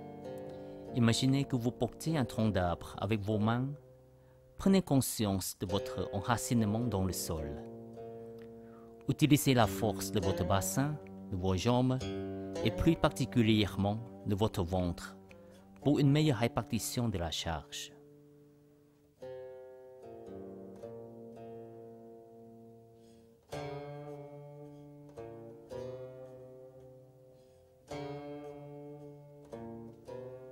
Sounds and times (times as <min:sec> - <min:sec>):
Music: 0:00.0 - 0:30.5
Speech: 0:01.0 - 0:03.8, 0:04.6 - 0:07.7, 0:09.1 - 0:15.2, 0:15.8 - 0:18.0.